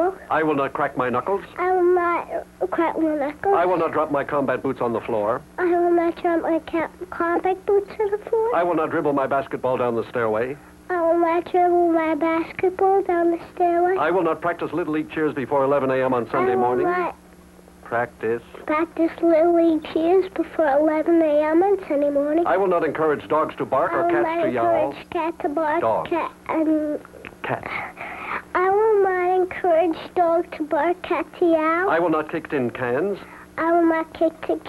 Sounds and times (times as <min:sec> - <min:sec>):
Speech: 0:14.0 - 0:17.1, 0:22.3 - 0:25.1.